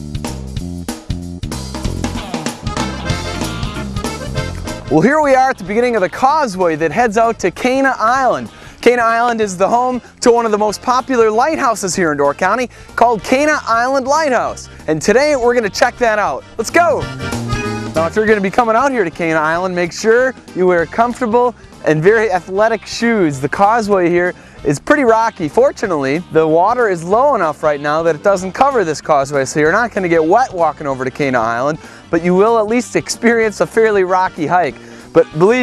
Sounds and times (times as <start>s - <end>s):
Music: 0.0s - 35.6s
Speech: 4.9s - 17.1s, 18.0s - 35.6s.